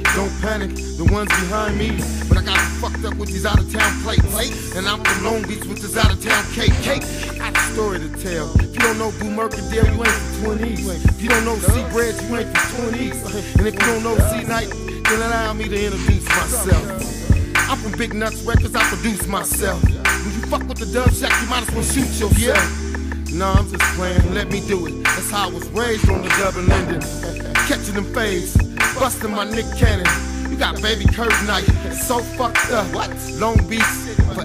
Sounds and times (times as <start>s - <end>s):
Music: 0.0s - 34.4s.